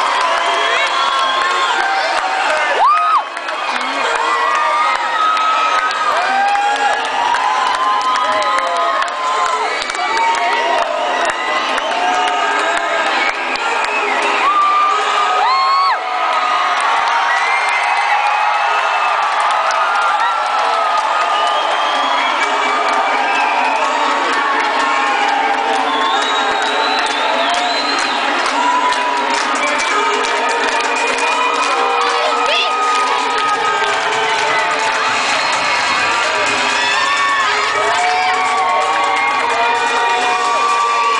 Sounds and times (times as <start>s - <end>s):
Music: 25.6s - 41.1s.